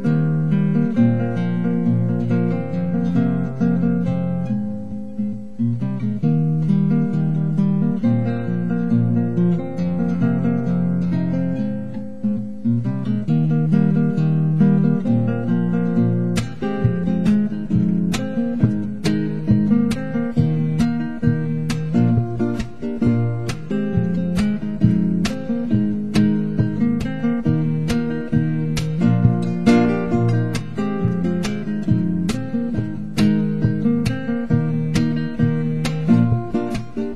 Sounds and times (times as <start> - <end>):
Guitar: 0.0 - 37.1.